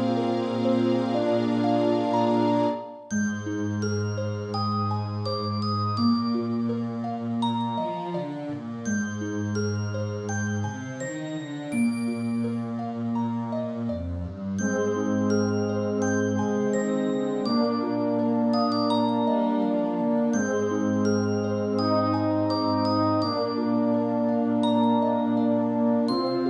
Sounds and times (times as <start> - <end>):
Background music: 0.0 - 26.5.